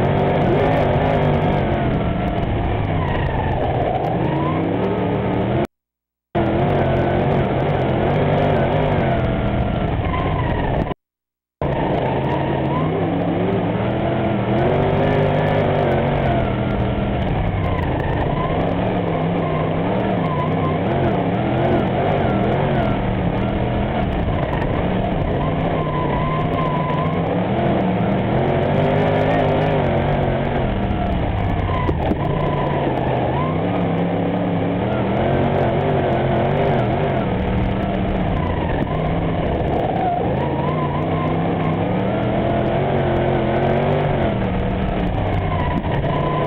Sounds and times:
Car: 0:00.0 - 0:11.0, 0:11.6 - 0:46.4.

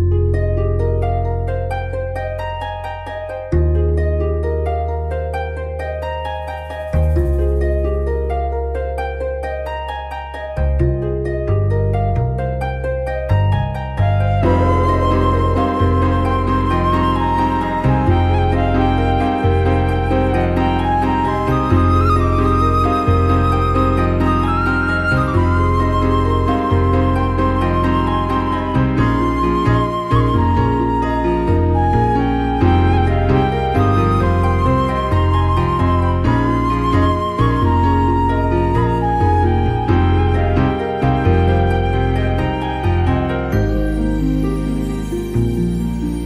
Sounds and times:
Music: 0:00.0 - 0:46.2.

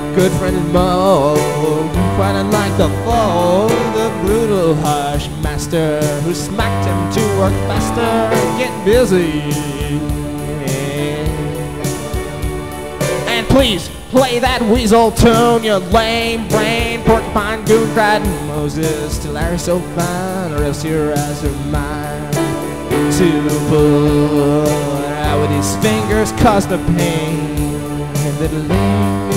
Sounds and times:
Music: 0:00.0 - 0:29.3
Speech: 0:13.3 - 0:22.2.

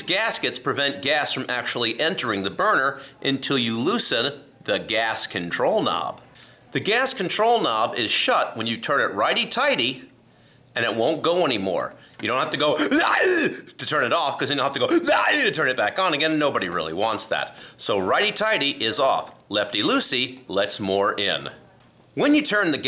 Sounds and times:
Speech: 0:00.0 - 0:10.1, 0:10.8 - 0:13.0, 0:13.7 - 0:22.8.

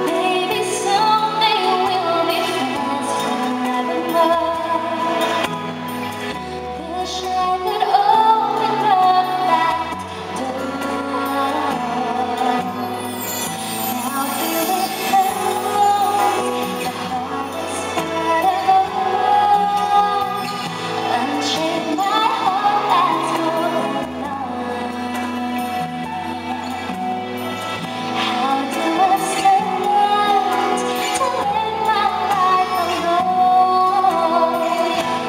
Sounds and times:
Singing: 0:00.0 - 0:05.5, 0:06.8 - 0:26.1, 0:28.2 - 0:35.2
Music: 0:00.0 - 0:35.2.

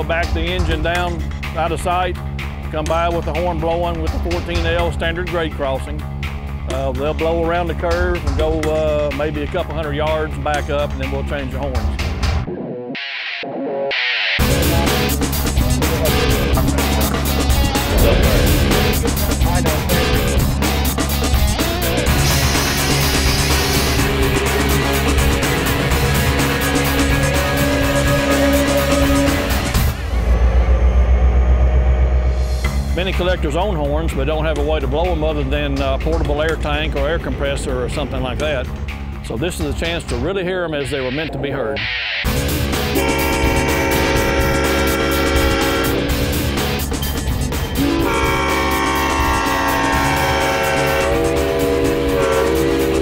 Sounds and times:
Speech: 0:00.0 - 0:06.0, 0:06.7 - 0:12.0, 0:19.1 - 0:20.3, 0:32.9 - 0:41.8
Music: 0:00.0 - 0:53.0
Outside, urban or manmade: 0:00.0 - 0:53.0.

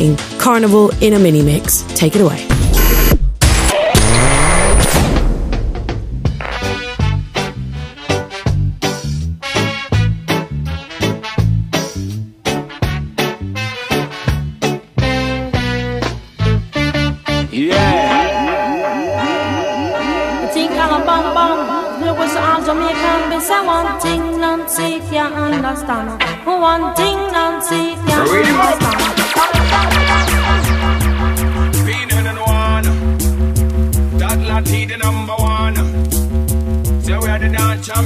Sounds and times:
Music: 0:00.0 - 0:38.0.

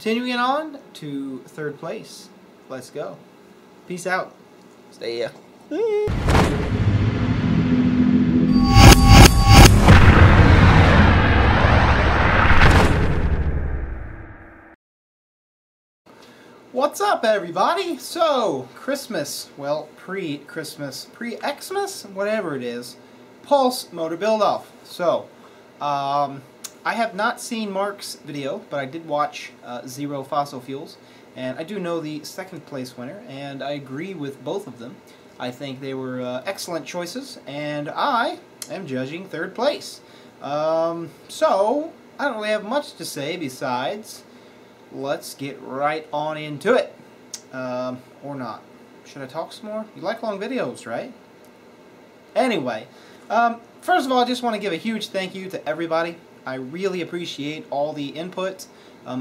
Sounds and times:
Speech: 0:00.0 - 0:03.2, 0:03.9 - 0:06.1, 0:16.7 - 0:44.3, 0:44.9 - 0:51.2, 0:52.3 - 0:59.2
Thump, thud: 0:06.1 - 0:07.7, 0:12.3 - 0:13.6
Boom: 0:06.1 - 0:14.8.

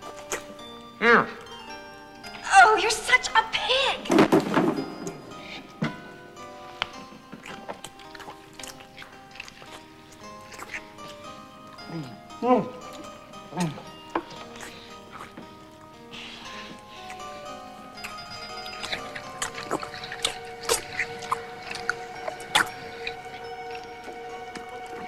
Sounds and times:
Music: 0:00.0 - 0:25.0.

